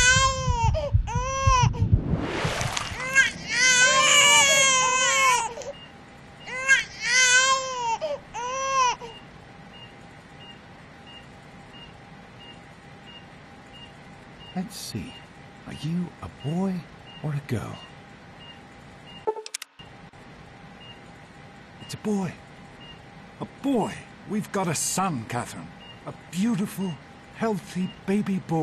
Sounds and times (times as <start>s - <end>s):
Speech: 14.6s - 17.9s, 21.9s - 22.4s, 23.4s - 28.6s.